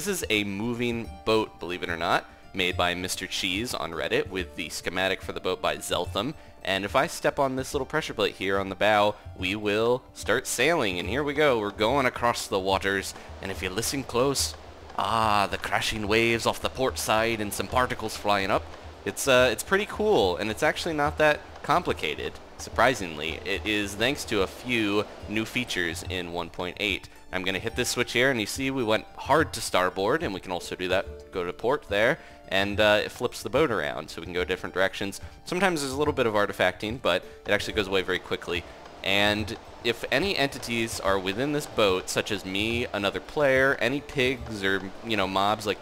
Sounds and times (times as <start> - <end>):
Music: 0.0 - 45.8
Speech: 0.0 - 45.8.